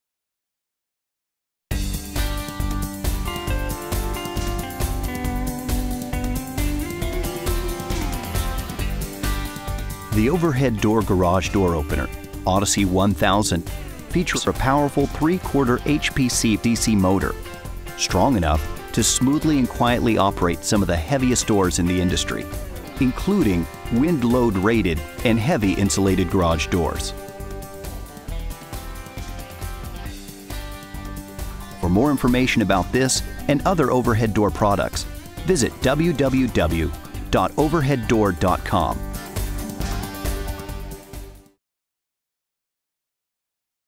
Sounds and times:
Music: 0:01.7 - 0:41.6
Speech: 0:10.1 - 0:17.4, 0:18.0 - 0:27.2, 0:31.8 - 0:39.0.

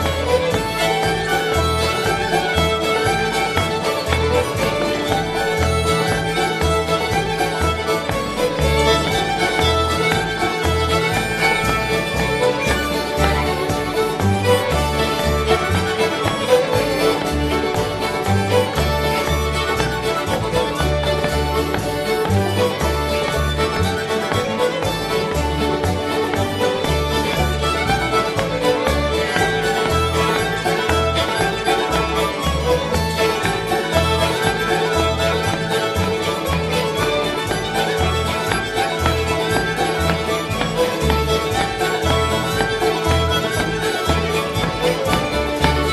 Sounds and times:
Music: 0:00.0 - 0:45.9.

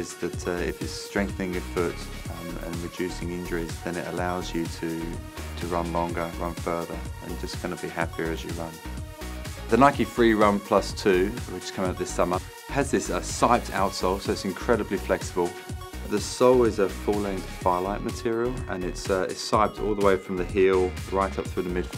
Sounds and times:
Speech: 0:00.0 - 0:08.8, 0:09.7 - 0:21.9
Music: 0:00.0 - 0:21.9.

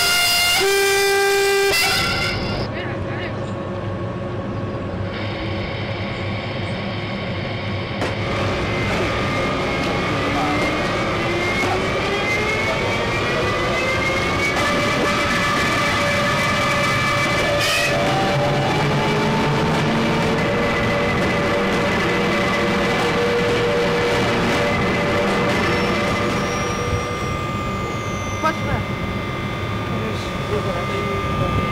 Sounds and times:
Vehicle: 0:01.8 - 0:31.7.

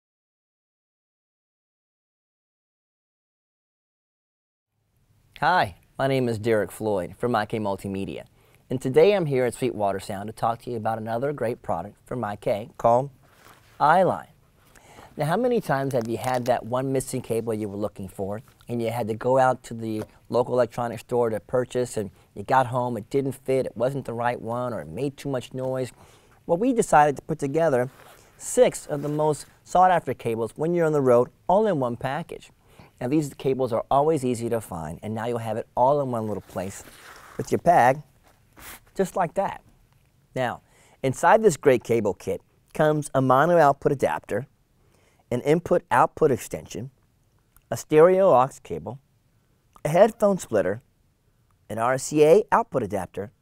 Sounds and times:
Speech: 0:05.4 - 0:13.2, 0:13.8 - 0:14.4, 0:15.2 - 0:38.1, 0:39.0 - 0:39.7, 0:40.4 - 0:44.5, 0:45.3 - 0:47.0, 0:47.7 - 0:49.0, 0:49.8 - 0:50.8, 0:51.7 - 0:53.4.

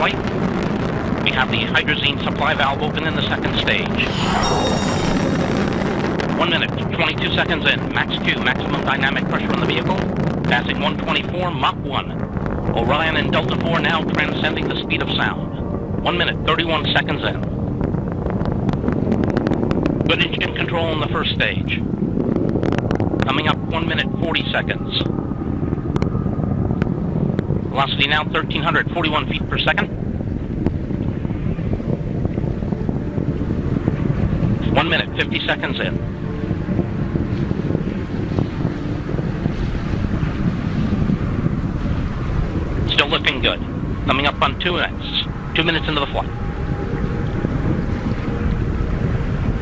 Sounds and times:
Wind noise (microphone): 0:00.0 - 0:49.6.

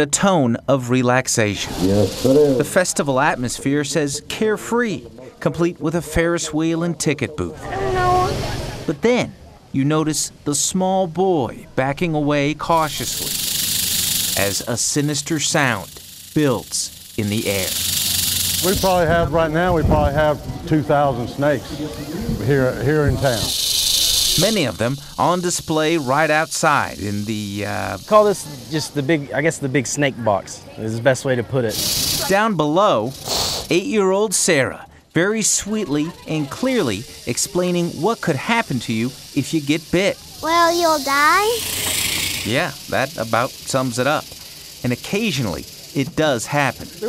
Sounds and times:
Hiss: 0:01.6 - 0:03.6, 0:12.6 - 0:19.3, 0:22.0 - 0:29.1, 0:31.7 - 0:33.9, 0:35.5 - 0:47.0.

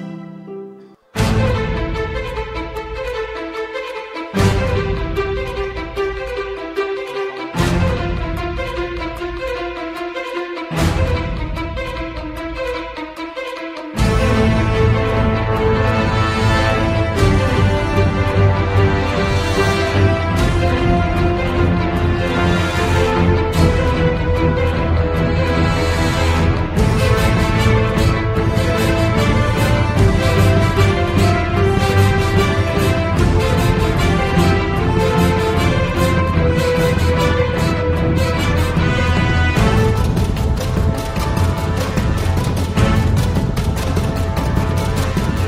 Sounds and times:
Theme music: 0:00.0 - 0:45.4.

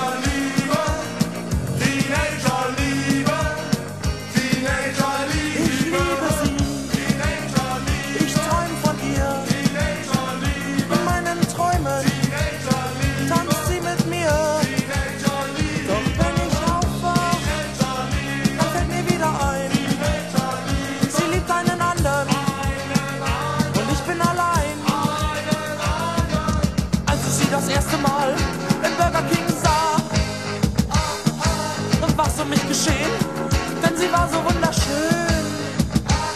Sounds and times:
Guitar: 0:00.0 - 0:36.3.

